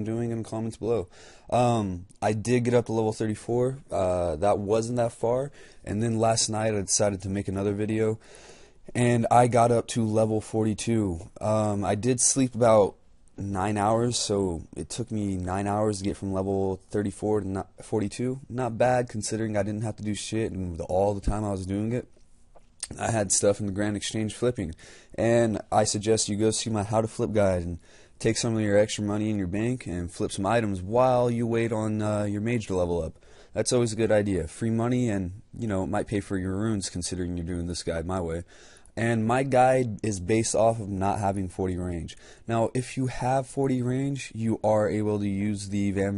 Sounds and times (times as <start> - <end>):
Speech: 0.0 - 8.2, 8.9 - 22.1, 22.8 - 46.1.